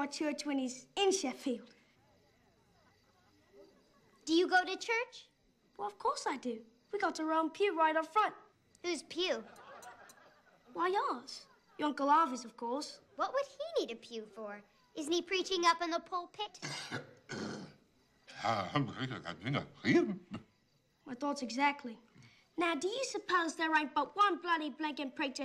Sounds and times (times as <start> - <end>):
Speech: 4.3 - 9.5, 10.8 - 16.6, 18.3 - 20.2, 22.6 - 25.4.